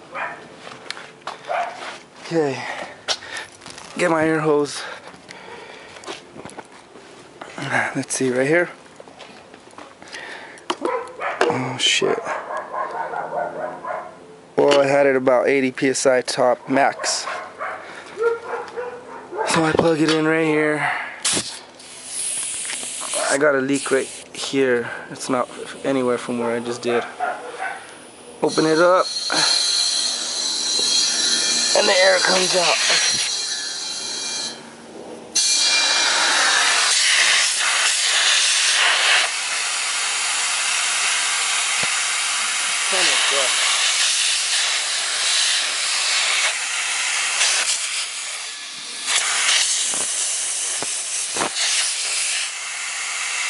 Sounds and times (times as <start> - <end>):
Bow-wow: 0.1 - 0.4, 1.5 - 1.8, 10.8 - 11.6, 12.2 - 14.2, 17.0 - 19.6, 27.0 - 27.8.